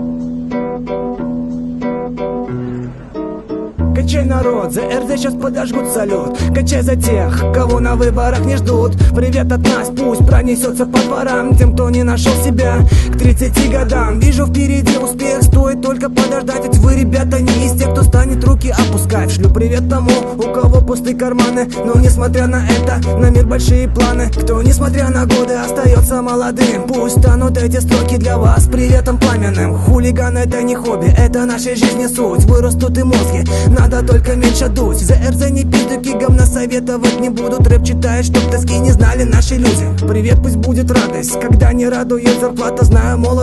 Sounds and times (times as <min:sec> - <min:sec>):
Music: 0:00.0 - 0:43.4.